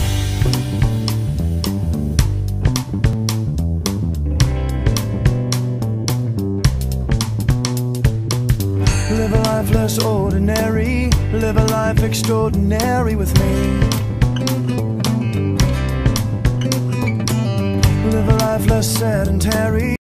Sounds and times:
Music: 0.0s - 20.0s.

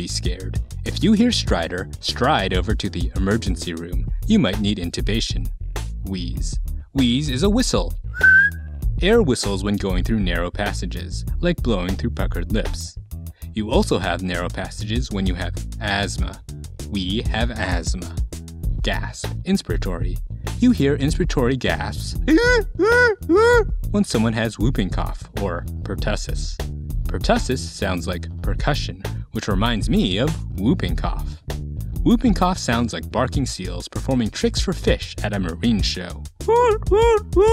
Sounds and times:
Speech: 0.0s - 8.0s, 9.0s - 13.0s, 13.6s - 18.2s, 18.8s - 31.4s, 32.0s - 37.5s
Music: 0.0s - 37.5s.

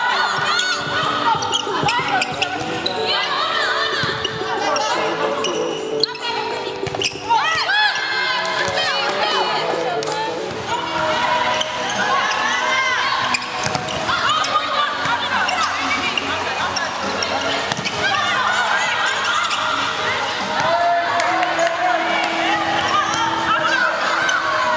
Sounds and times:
Music: 0.0s - 24.7s.

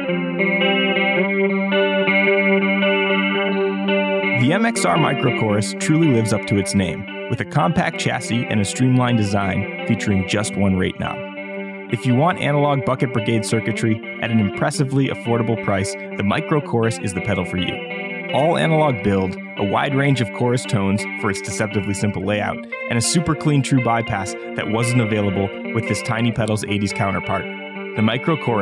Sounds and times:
Music: 0.0s - 28.6s
Speech: 4.4s - 11.2s, 11.9s - 17.8s, 18.4s - 27.4s, 28.0s - 28.6s.

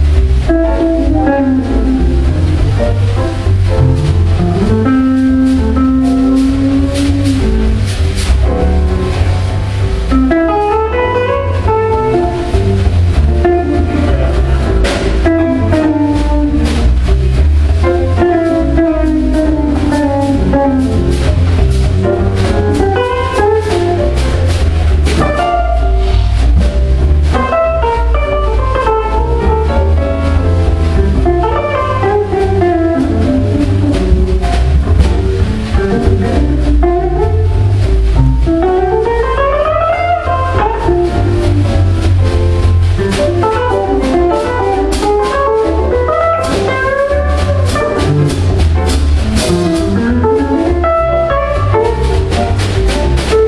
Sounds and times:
Jazz: 0.0s - 53.4s.

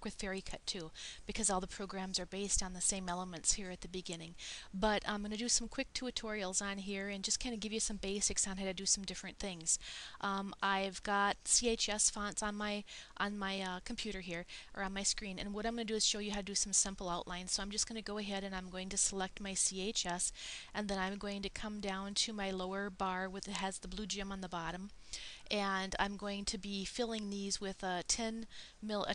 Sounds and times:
Speech: 0.0s - 24.9s, 25.5s - 29.1s.

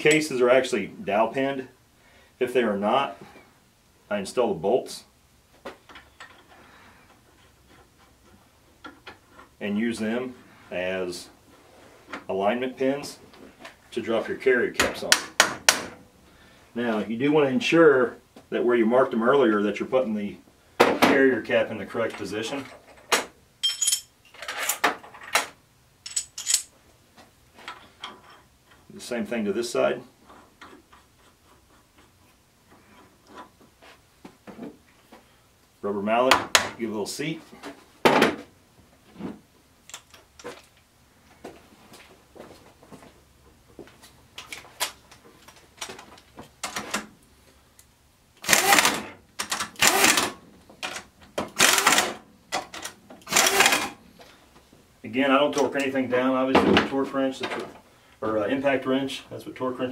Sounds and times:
Speech: 0.0s - 1.8s, 2.4s - 3.3s, 4.1s - 5.1s, 9.6s - 11.4s, 12.3s - 13.2s, 13.9s - 15.3s, 16.8s - 20.4s, 21.0s - 22.7s, 28.9s - 30.1s, 35.8s - 37.6s, 55.0s - 59.9s.

